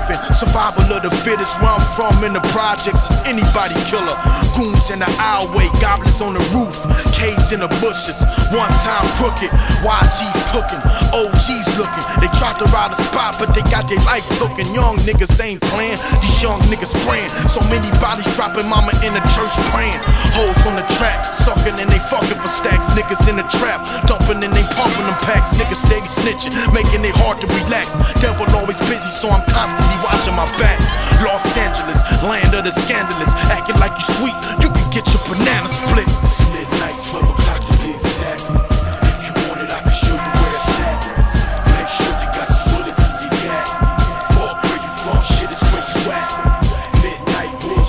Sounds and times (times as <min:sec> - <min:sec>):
Music: 0:00.0 - 0:47.8.